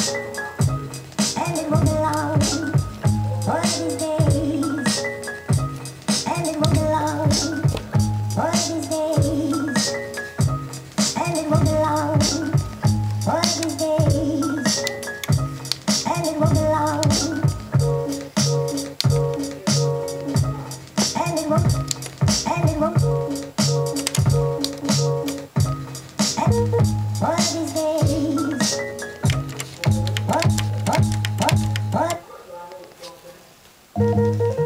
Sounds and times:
Music: 0.0s - 32.2s, 33.9s - 34.6s.

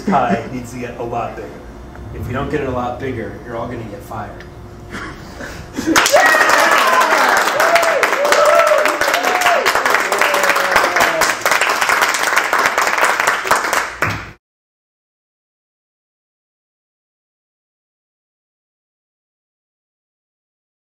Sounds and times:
Applause: 5.9s - 14.4s.

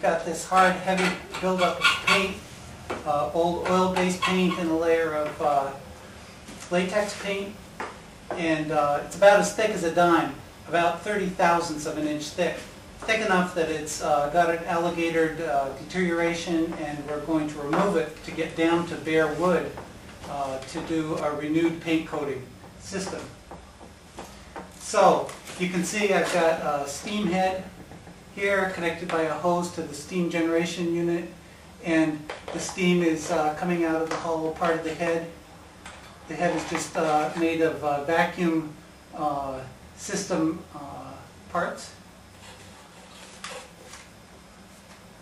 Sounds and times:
Speech: 0.0s - 2.4s, 3.0s - 5.8s, 6.6s - 7.6s, 8.3s - 23.4s, 24.8s - 27.8s, 28.4s - 35.4s, 36.3s - 42.0s.

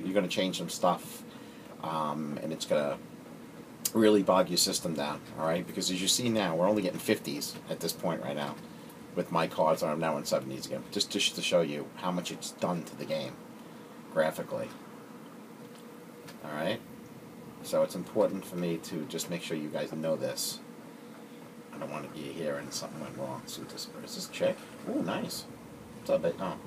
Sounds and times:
Speech: 0.0s - 1.2s, 1.8s - 3.0s, 3.9s - 8.6s, 9.2s - 13.4s, 14.1s - 14.8s, 16.4s - 16.8s, 17.6s - 20.7s, 21.7s - 25.5s, 26.1s - 26.6s.

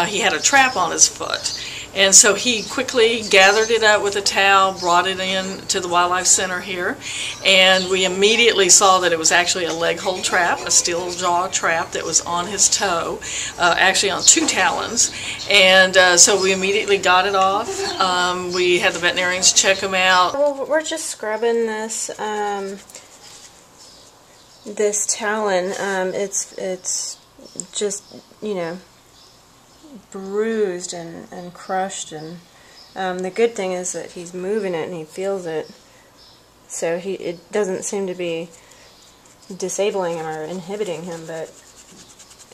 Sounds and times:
Speech: 0.0s - 22.8s, 24.7s - 28.9s, 29.9s - 35.8s, 36.7s - 38.6s, 39.5s - 41.6s.

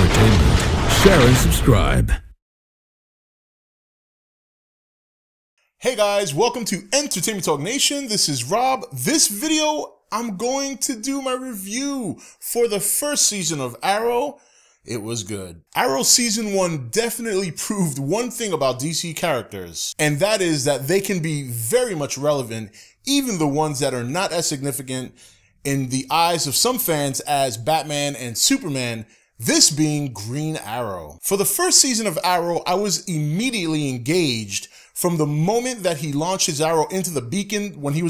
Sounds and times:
Speech: 0.0s - 2.4s, 5.8s - 38.1s.

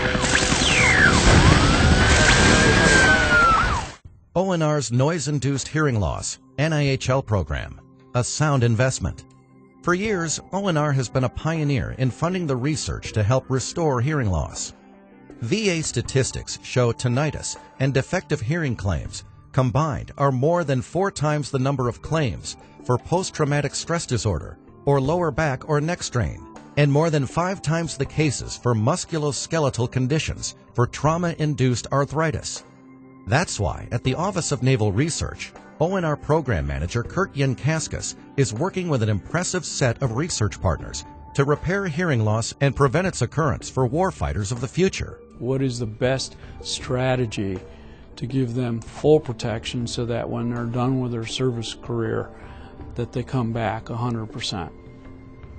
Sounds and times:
Music: 0.0s - 55.5s
Speech: 4.4s - 9.2s, 9.8s - 14.8s, 15.4s - 32.6s, 33.3s - 47.6s, 48.2s - 52.4s, 53.0s - 54.7s.

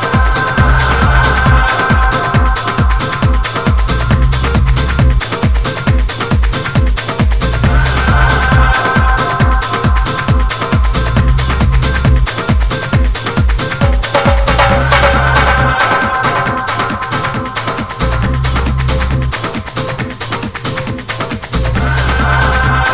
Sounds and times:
Techno: 0.0s - 22.9s.

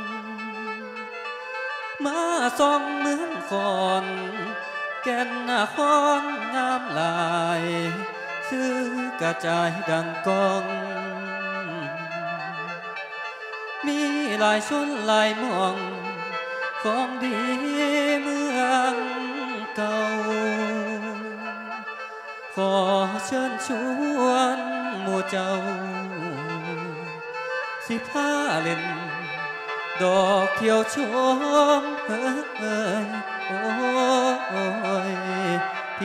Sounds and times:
Music: 0.0s - 36.0s.

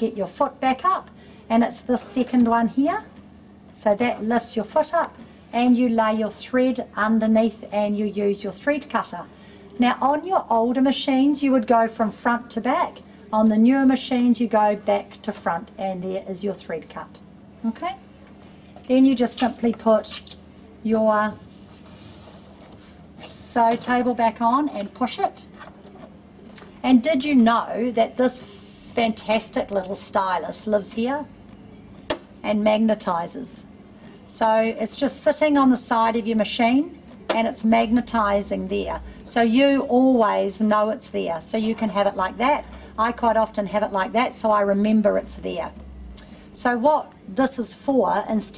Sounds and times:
Speech: 0.0s - 3.2s, 3.8s - 18.0s, 18.9s - 21.4s, 23.2s - 25.5s, 26.8s - 31.3s, 32.4s - 33.7s, 34.3s - 45.8s, 46.6s - 48.5s.

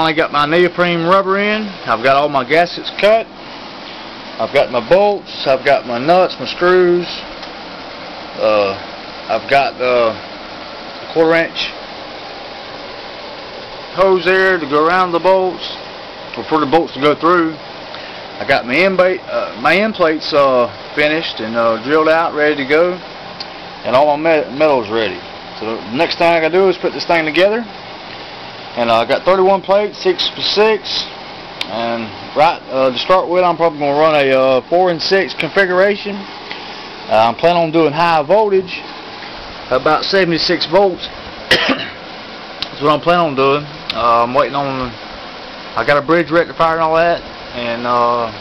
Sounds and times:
Speech: 0.0s - 3.3s, 4.4s - 7.3s, 8.4s - 10.2s, 11.1s - 11.8s, 14.0s - 15.8s, 16.4s - 17.6s, 18.4s - 23.0s, 23.8s - 27.8s, 28.8s - 36.3s, 37.1s - 38.9s, 39.7s - 41.1s, 42.6s - 45.0s, 45.8s - 48.4s.

